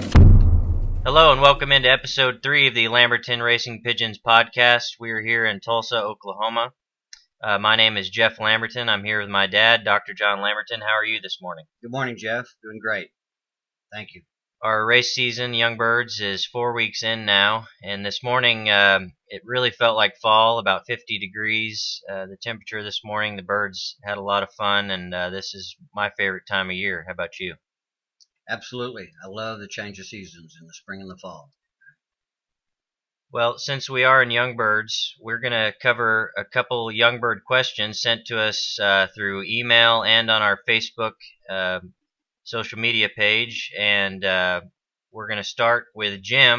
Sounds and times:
Speech: 1.1 - 13.1, 14.0 - 27.6, 28.5 - 31.5, 33.4 - 41.9, 42.5 - 46.5.

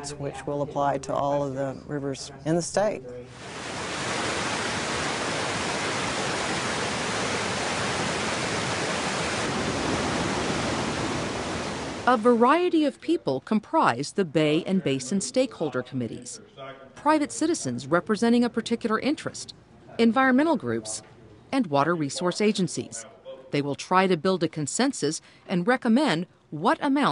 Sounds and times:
Waterfall: 3.3 - 12.4.

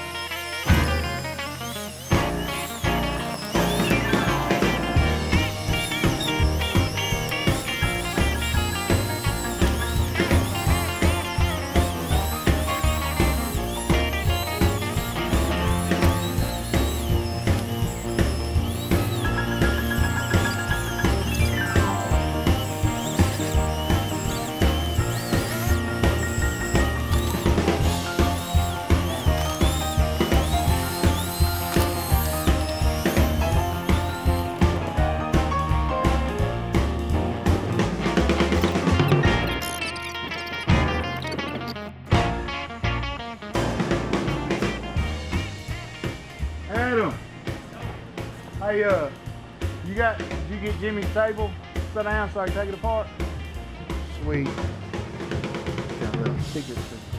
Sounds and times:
Music: 0.0 - 57.1.

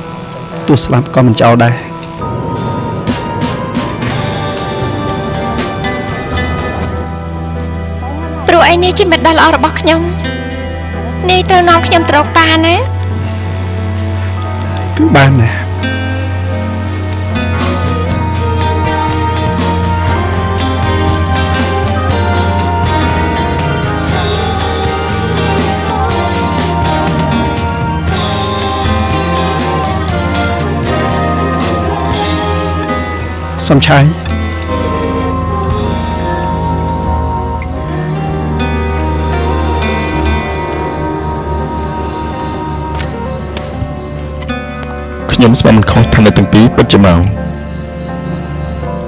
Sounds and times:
Music: 0.0 - 49.0.

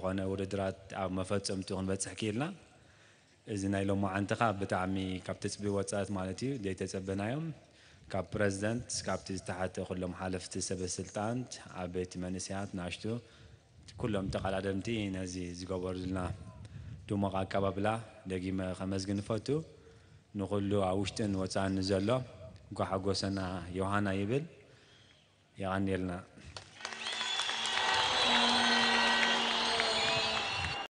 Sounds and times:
Male speech, man speaking: 0.0 - 2.6, 3.5 - 13.2, 13.9 - 19.7, 20.4 - 24.5, 25.6 - 26.4
Narration, monologue: 0.0 - 26.6.

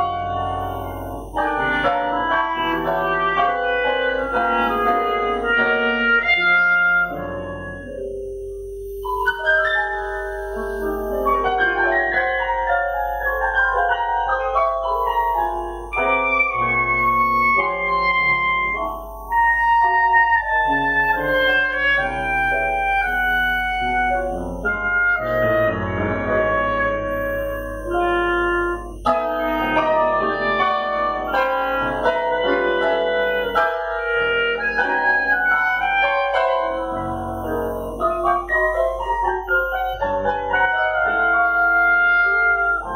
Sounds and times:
Clarinet: 0.0 - 42.9
Piano: 0.0 - 42.9.

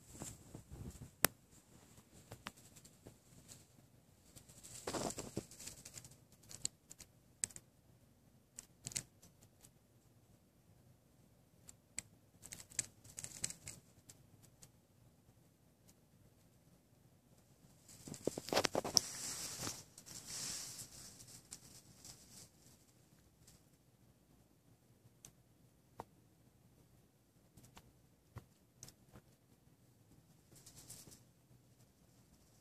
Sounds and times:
Crumpling, crinkling: 4.3 - 7.6, 12.4 - 13.8, 17.9 - 22.8, 30.5 - 31.2.

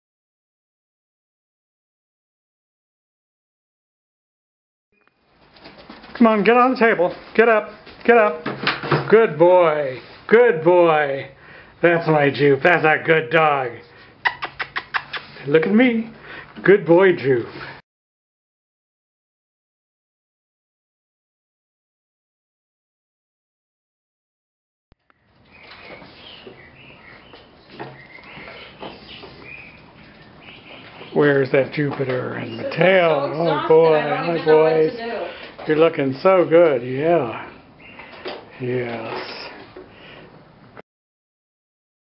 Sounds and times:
Speech: 6.2 - 13.8, 15.4 - 17.6, 31.1 - 37.6, 38.6 - 39.6.

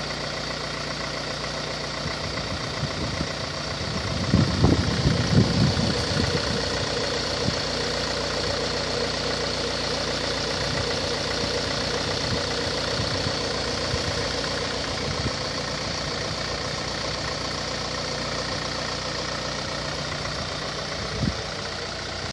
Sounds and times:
Idling: 0.0 - 22.3
Medium engine (mid frequency): 0.0 - 22.3
Vehicle: 0.0 - 22.3.

